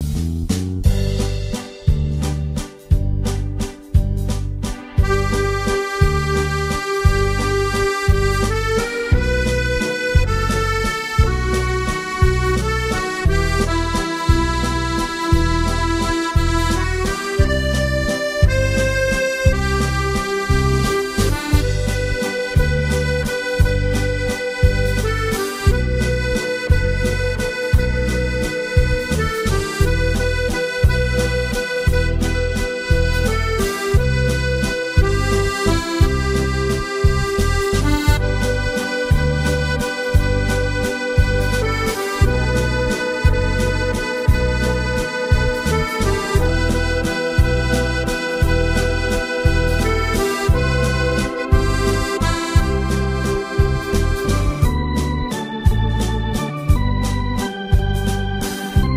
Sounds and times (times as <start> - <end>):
Accordion: 0.8 - 58.9.